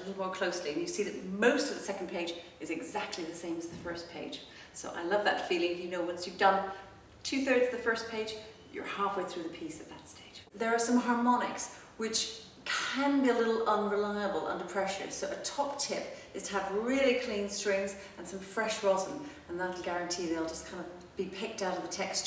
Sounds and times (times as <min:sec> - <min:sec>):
Speech: 0:00.0 - 0:22.2.